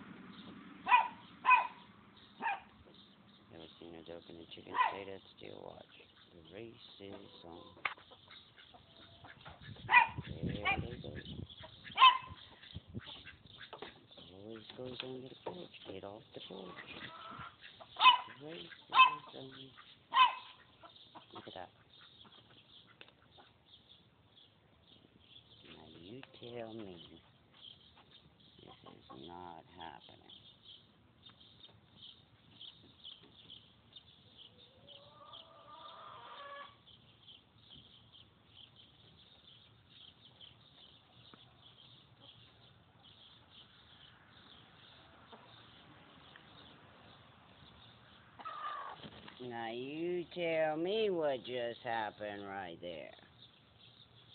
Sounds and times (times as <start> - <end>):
Speech: 3.5 - 7.8, 10.3 - 11.3, 14.2 - 16.9, 18.4 - 19.8, 21.4 - 21.8, 25.7 - 27.2, 28.6 - 30.4, 49.4 - 53.3
Animal: 4.2 - 23.6, 34.3 - 36.8, 48.4 - 49.2.